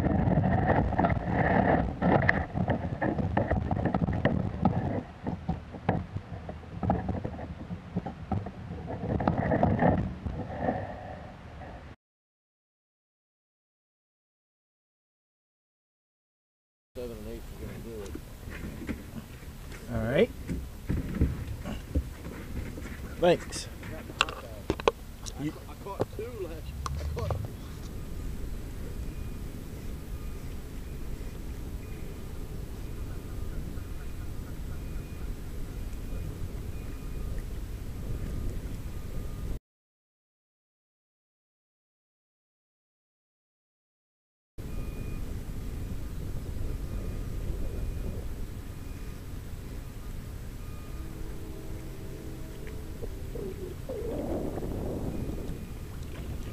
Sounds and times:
Outside, urban or manmade: 0.0s - 12.0s, 17.0s - 39.6s, 44.6s - 56.5s
Speech: 17.0s - 18.2s, 19.8s - 20.3s, 23.2s - 24.7s, 25.3s - 27.4s.

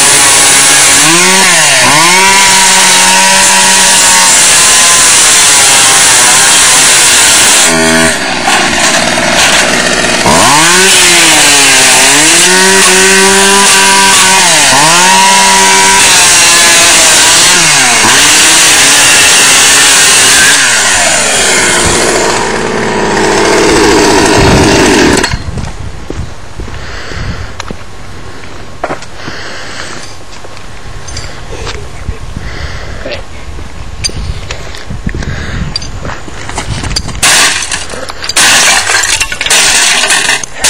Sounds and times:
Outside, rural or natural: 0.0s - 40.6s
Speech: 31.5s - 32.2s.

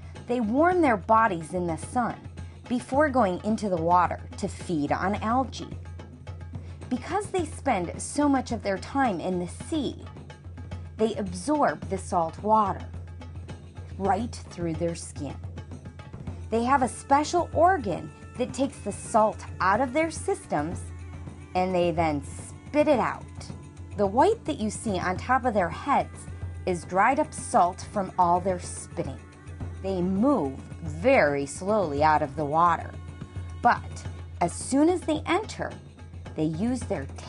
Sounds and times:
Music: 0.0s - 37.2s
Speech: 0.3s - 5.7s, 6.9s - 10.1s, 11.0s - 12.8s, 14.0s - 15.4s, 16.6s - 20.9s, 21.6s - 29.2s, 29.9s - 33.0s, 33.6s - 35.8s, 36.4s - 37.2s.

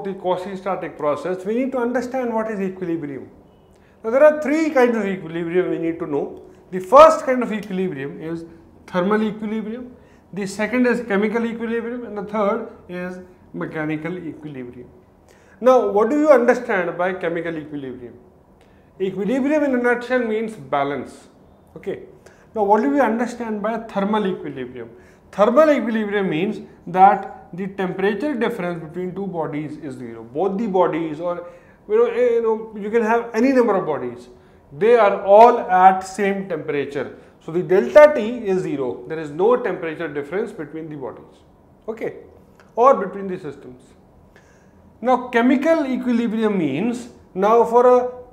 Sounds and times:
Speech: 0.0s - 3.3s, 4.0s - 15.0s, 15.6s - 18.2s, 19.0s - 44.0s, 45.0s - 48.3s.

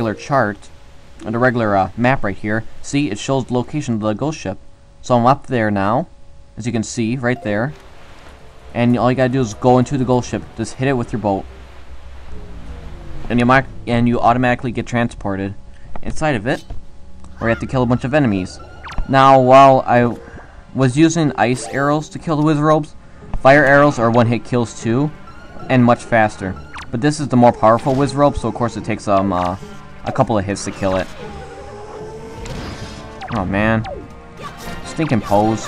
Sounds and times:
Speech: 0.0s - 7.8s, 8.8s - 11.4s, 13.3s - 16.6s, 17.4s - 20.2s, 20.8s - 25.1s, 25.7s - 31.2s, 33.3s - 35.6s.

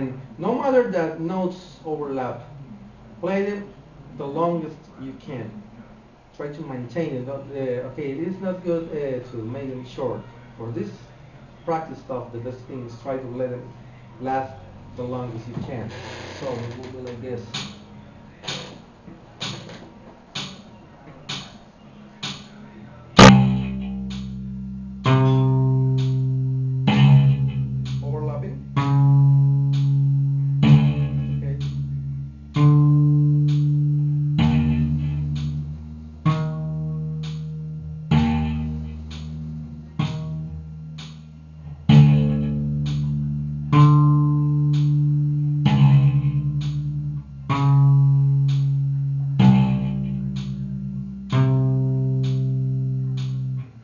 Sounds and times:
Speech: 0.0s - 18.9s, 20.7s - 23.2s, 28.0s - 28.6s, 30.5s - 32.1s
Bass guitar: 14.2s - 53.8s
Tapping (guitar technique): 17.0s - 18.8s, 19.4s - 21.6s, 22.2s - 22.6s, 23.2s - 53.8s.

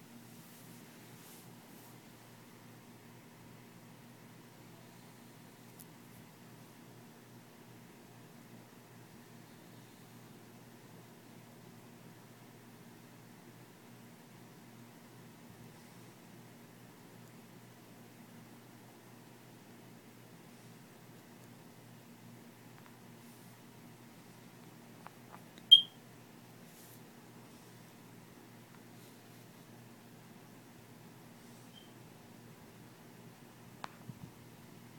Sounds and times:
Inside, small room: 0.0s - 34.9s.

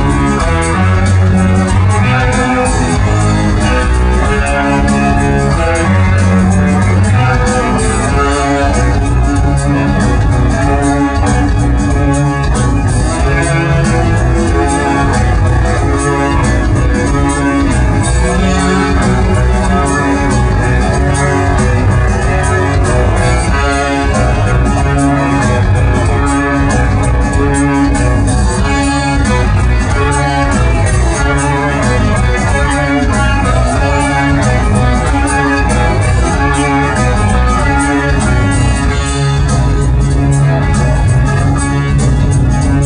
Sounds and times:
Music: 0.0s - 42.8s.

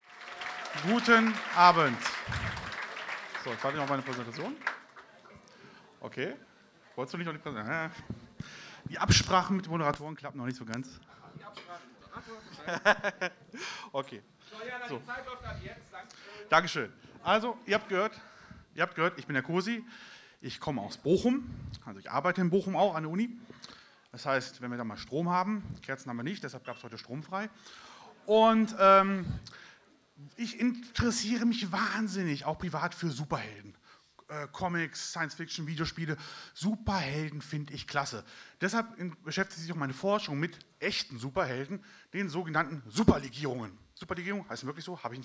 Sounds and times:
Speech: 0.8s - 2.2s, 3.4s - 4.6s, 6.0s - 8.0s, 8.9s - 12.8s, 14.0s - 18.2s, 18.8s - 23.4s, 24.2s - 27.5s, 28.3s - 29.4s, 30.3s - 45.2s.

